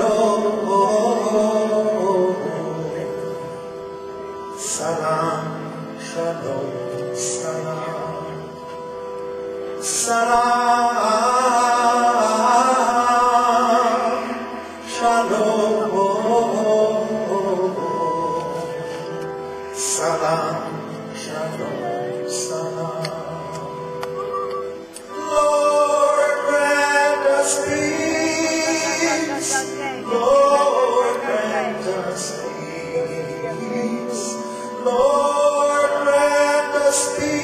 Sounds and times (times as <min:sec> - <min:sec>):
Male singing: 0:00.0 - 0:03.5, 0:04.6 - 0:08.6, 0:09.8 - 0:24.1, 0:25.1 - 0:37.4
Music: 0:00.0 - 0:37.4.